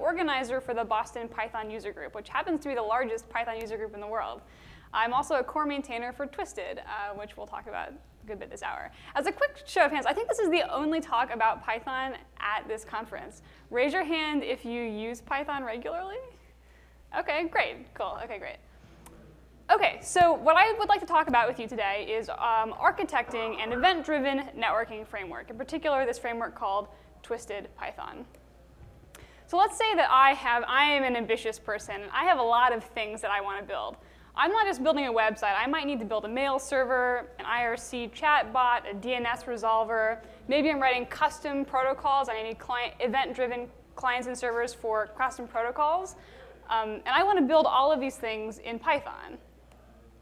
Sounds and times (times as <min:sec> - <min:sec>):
Speech: 0:05.0 - 0:16.4, 0:17.2 - 0:18.6, 0:19.7 - 0:28.3, 0:29.5 - 0:49.4.